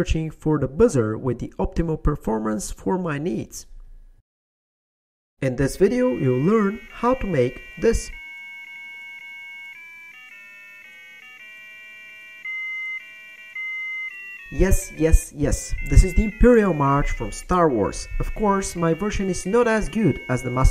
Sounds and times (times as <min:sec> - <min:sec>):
Speech: 0:00.0 - 0:03.7, 0:05.4 - 0:08.2, 0:14.6 - 0:20.7
Buzzer: 0:05.7 - 0:15.2, 0:15.8 - 0:20.7.